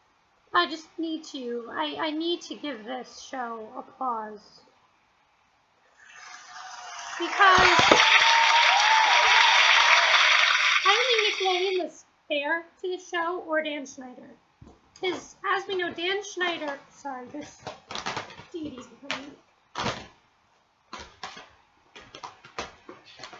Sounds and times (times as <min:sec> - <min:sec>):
Speech: 0:00.6 - 0:04.7, 0:07.2 - 0:07.9, 0:10.9 - 0:14.4, 0:15.0 - 0:17.6, 0:18.5 - 0:19.4.